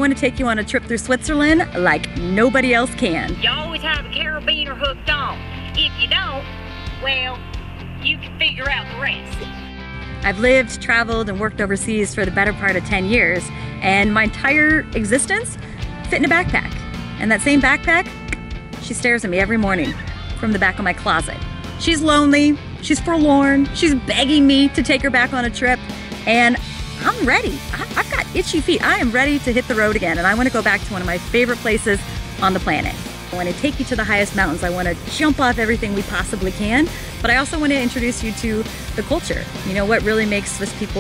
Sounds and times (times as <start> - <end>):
Music: 0.0 - 41.0
Speech: 10.2 - 15.5, 16.1 - 18.1, 18.8 - 41.0.